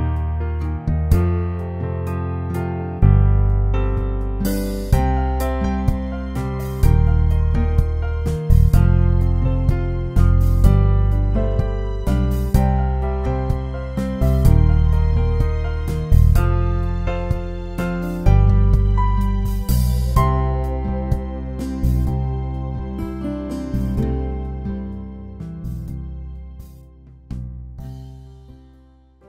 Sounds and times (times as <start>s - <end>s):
Music: 0.0s - 29.2s.